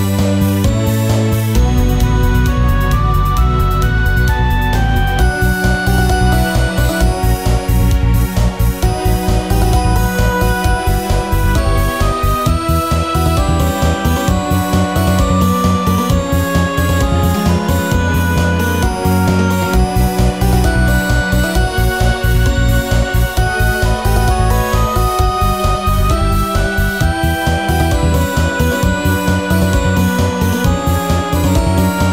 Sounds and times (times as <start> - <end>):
Music: 0.0 - 32.1.